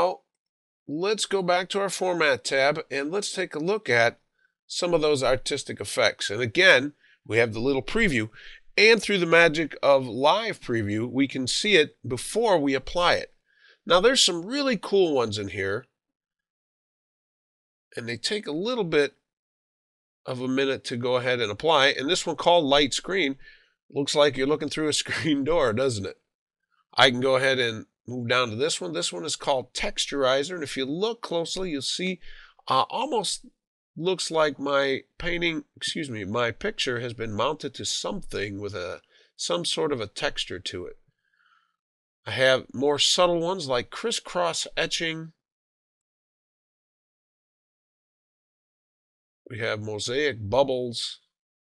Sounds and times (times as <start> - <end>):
Speech: 0.0 - 0.3, 0.9 - 13.3, 13.9 - 15.9, 18.0 - 19.2, 20.3 - 26.2, 27.0 - 41.0, 42.3 - 45.4, 49.5 - 51.4.